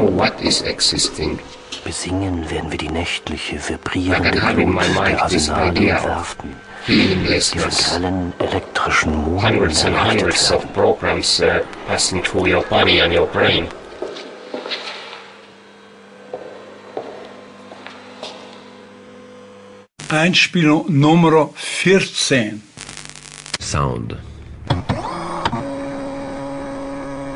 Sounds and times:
Radio: 0.0 - 13.8, 20.0 - 24.2
Speech: 0.0 - 13.8, 20.1 - 22.7, 23.6 - 24.3.

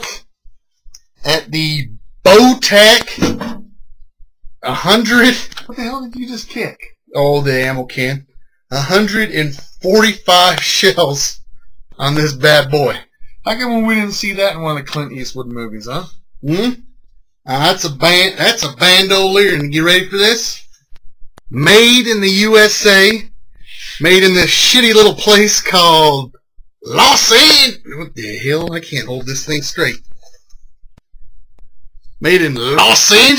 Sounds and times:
Speech: 0.0 - 0.3, 1.0 - 3.6, 4.6 - 16.9, 17.5 - 20.7, 21.5 - 30.3, 32.2 - 33.3.

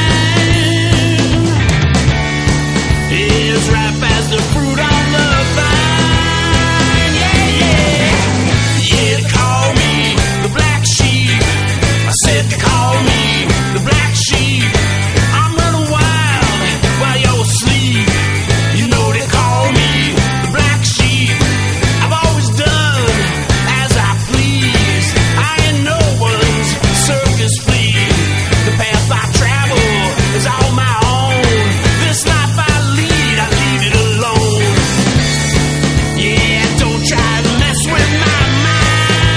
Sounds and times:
Music: 0.0 - 39.3.

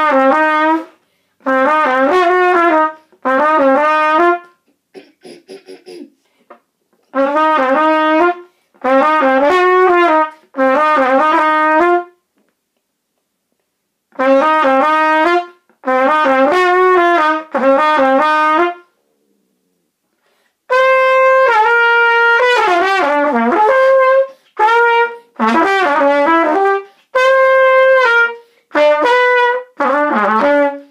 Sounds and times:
Trumpet: 0.0 - 4.7, 7.0 - 12.3, 14.1 - 19.0, 20.1 - 30.9.

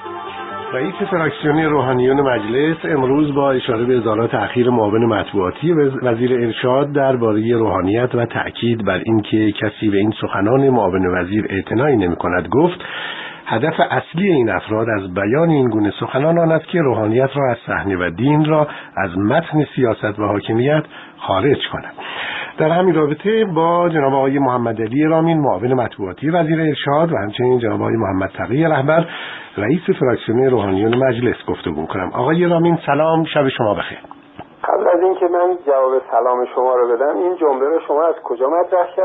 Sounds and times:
Radio: 0.4 - 9.5, 31.8 - 39.0
Speech: 0.8 - 12.8, 13.5 - 22.0, 22.6 - 39.0.

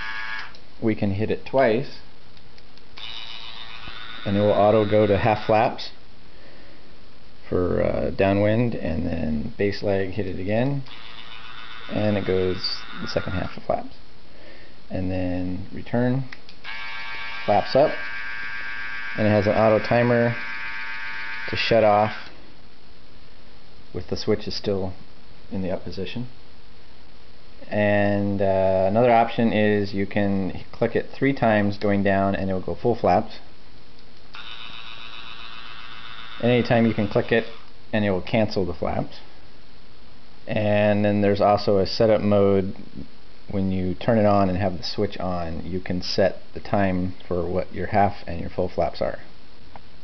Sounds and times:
Speech: 0.8 - 2.1, 4.2 - 6.0, 7.4 - 10.9, 11.9 - 14.0, 14.9 - 16.3, 17.5 - 18.0, 19.2 - 20.4, 21.5 - 22.2, 23.9 - 26.4, 27.6 - 33.5, 36.4 - 39.3, 40.5 - 49.3.

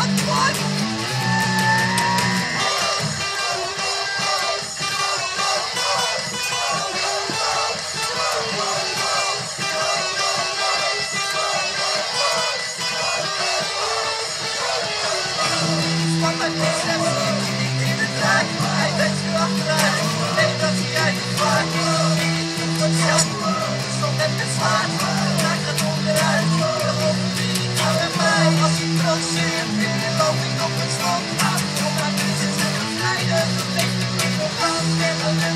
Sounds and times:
Electric guitar: 0.0 - 35.5.

